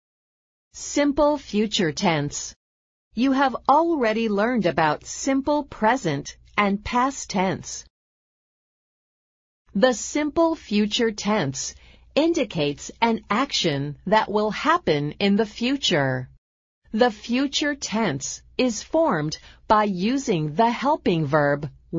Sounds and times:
Speech: 0.8s - 2.6s, 3.2s - 7.9s, 9.8s - 21.9s.

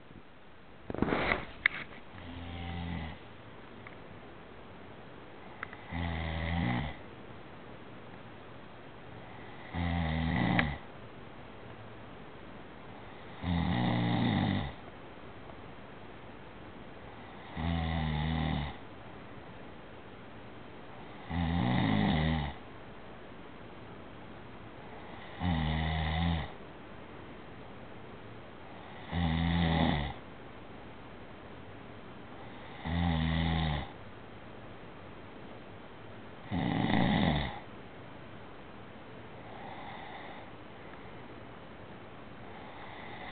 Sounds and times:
Snoring: 2.2s - 3.2s, 5.8s - 7.0s, 9.3s - 10.9s, 13.1s - 14.8s, 17.2s - 18.8s, 21.1s - 22.6s, 25.0s - 26.6s, 28.8s - 30.2s, 32.5s - 34.0s, 36.5s - 37.6s, 39.5s - 40.5s, 42.6s - 43.3s.

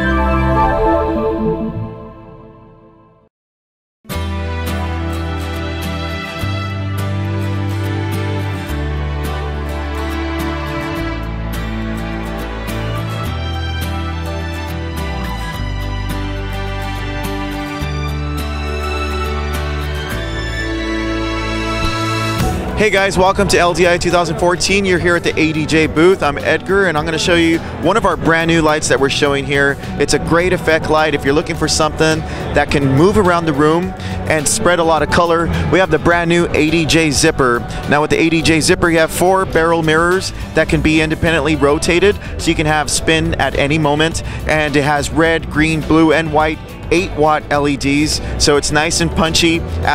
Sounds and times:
Music: 0.0s - 3.3s, 4.1s - 49.9s
Speech: 22.8s - 49.9s.

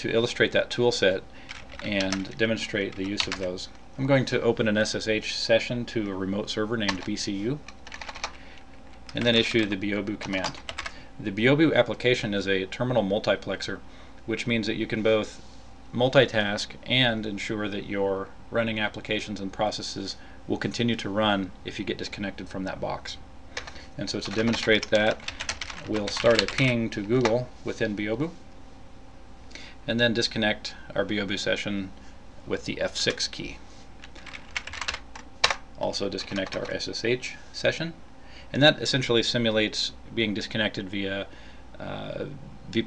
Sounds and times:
Speech: 0.0s - 7.7s, 9.1s - 10.6s, 11.2s - 15.4s, 16.0s - 23.2s, 24.0s - 28.4s, 29.9s - 33.6s, 35.8s - 42.8s.

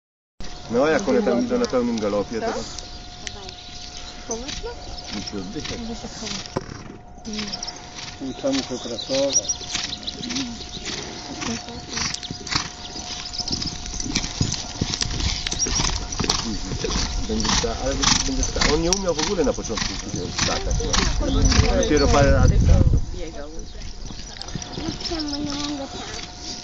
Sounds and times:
Horse: 0.8s - 22.6s, 23.2s - 26.6s.

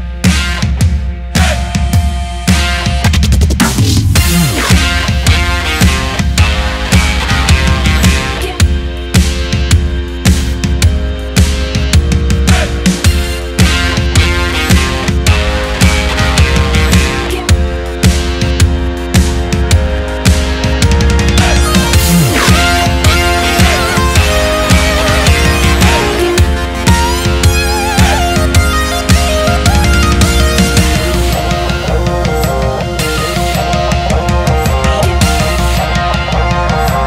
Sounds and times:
Music: 0.0s - 37.0s.

